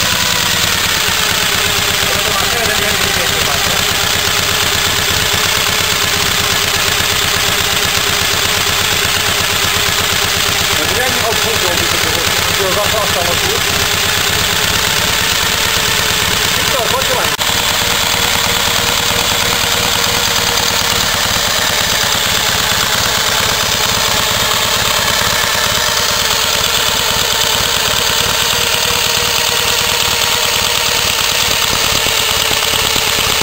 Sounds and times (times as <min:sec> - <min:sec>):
Engine: 0:00.0 - 0:33.4
Motorcycle: 0:00.0 - 0:33.4
Outside, urban or manmade: 0:00.0 - 0:33.4
Speech: 0:02.0 - 0:03.8, 0:10.8 - 0:13.6, 0:16.7 - 0:17.4.